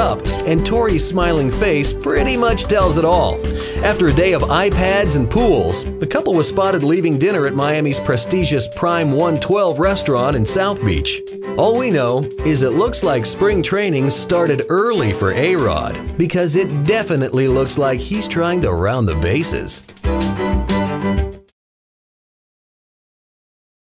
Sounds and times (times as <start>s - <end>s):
Speech: 0.0s - 19.8s
Music: 0.0s - 21.6s.